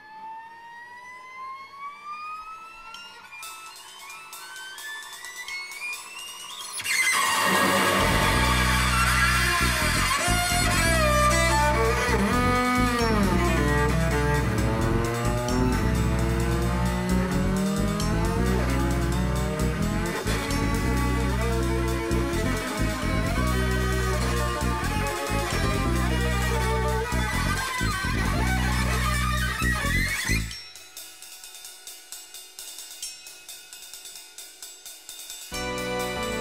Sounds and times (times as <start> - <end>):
Music: 2.4 - 36.4.